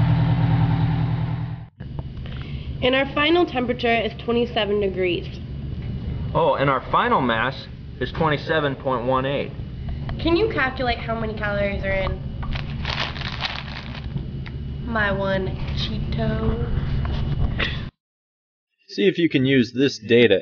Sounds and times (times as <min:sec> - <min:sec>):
Crackle: 0:12.4 - 0:14.2.